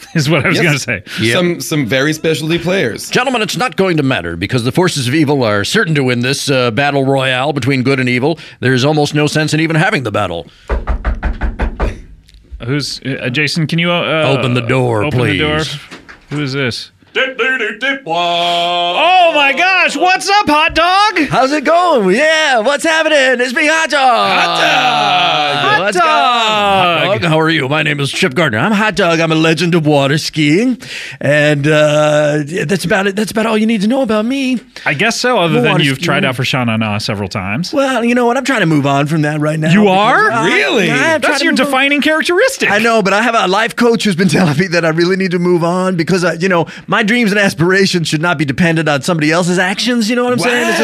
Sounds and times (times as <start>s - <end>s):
Speech: 0.1s - 10.5s, 12.6s - 50.8s.